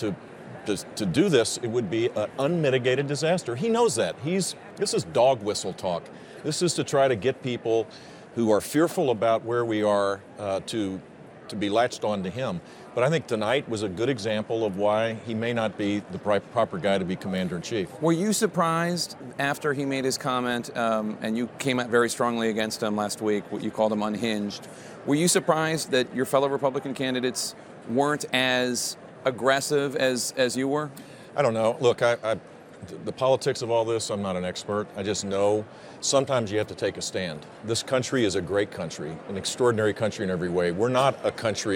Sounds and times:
Speech: 0:00.0 - 0:41.7.

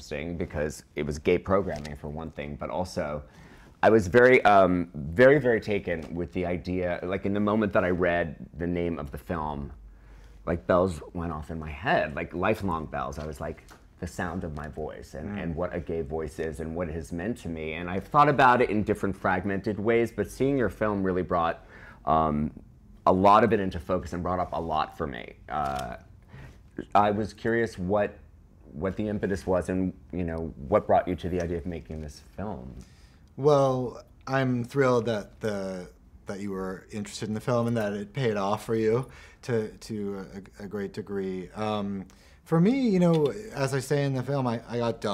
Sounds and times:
Speech: 0:00.0 - 0:09.8, 0:10.4 - 0:26.1, 0:26.8 - 0:32.8, 0:33.4 - 0:45.1.

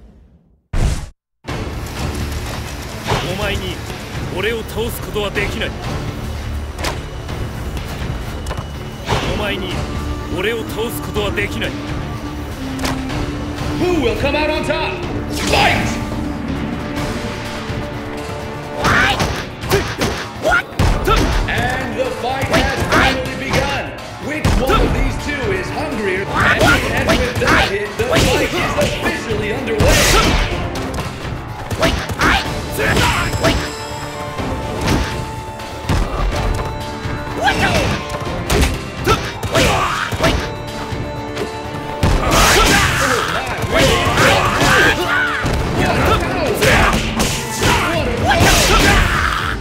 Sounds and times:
Music: 0:01.4 - 0:49.6
Speech: 0:03.1 - 0:05.8, 0:09.2 - 0:11.8, 0:13.8 - 0:16.0, 0:20.4 - 0:30.4.

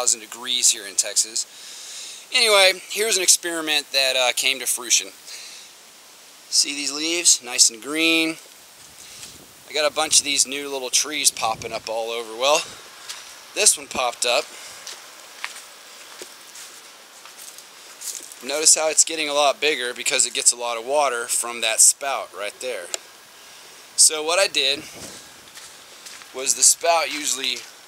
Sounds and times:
Speech: 0:00.0 - 0:01.5, 0:02.3 - 0:05.2, 0:06.5 - 0:08.4, 0:09.7 - 0:12.8, 0:13.6 - 0:14.5, 0:18.4 - 0:23.0, 0:24.0 - 0:25.0, 0:26.3 - 0:27.7
Rustling leaves: 0:00.0 - 0:27.8.

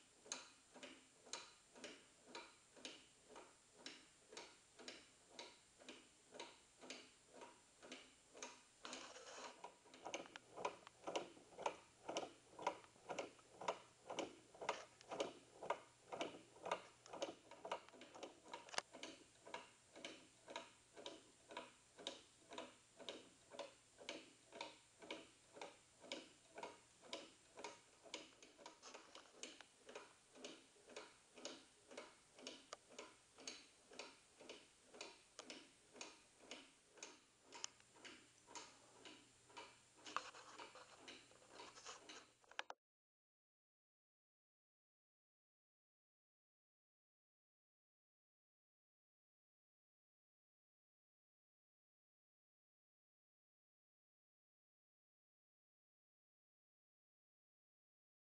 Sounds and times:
Tick-tock: 0:00.0 - 0:42.8.

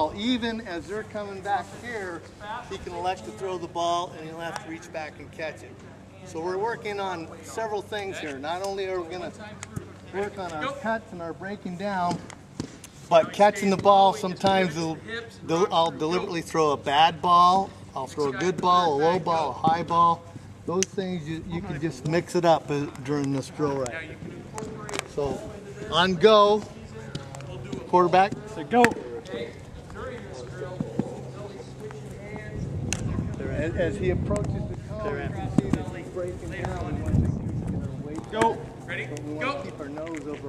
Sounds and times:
Outside, urban or manmade: 0:00.0 - 0:40.4.

